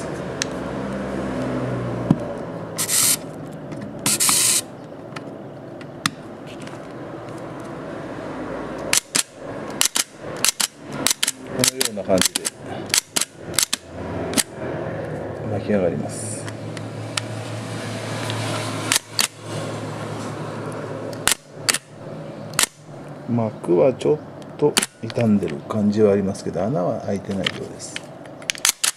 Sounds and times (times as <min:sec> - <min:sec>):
Speech: 0:11.6 - 0:12.5, 0:15.4 - 0:16.5, 0:23.3 - 0:28.0.